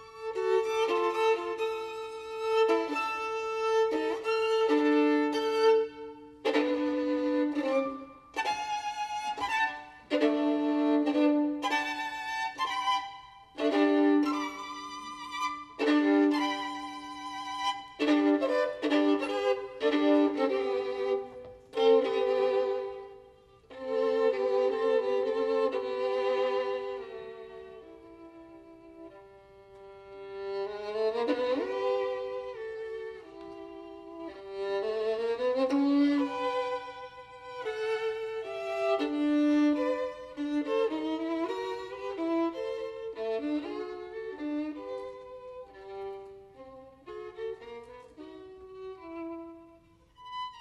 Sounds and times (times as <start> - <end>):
Violin, fiddle: 0.0 - 50.6.